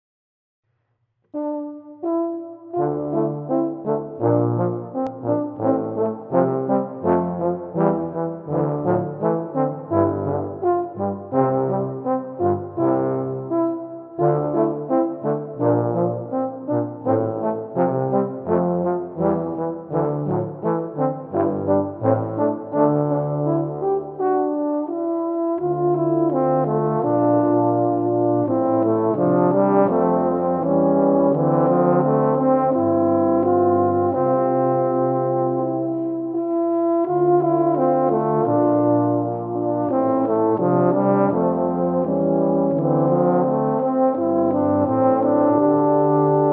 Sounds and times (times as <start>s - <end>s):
Music: 0.6s - 46.5s.